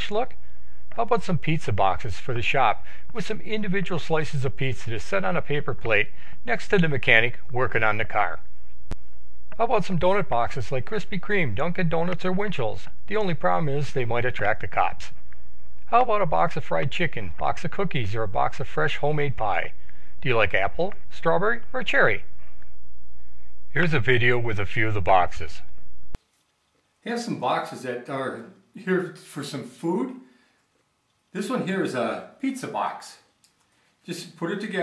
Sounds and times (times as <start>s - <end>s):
Speech: 0.0s - 8.4s, 9.6s - 15.2s, 15.9s - 22.3s, 23.7s - 25.7s, 27.0s - 30.3s, 31.3s - 33.3s, 34.0s - 34.8s.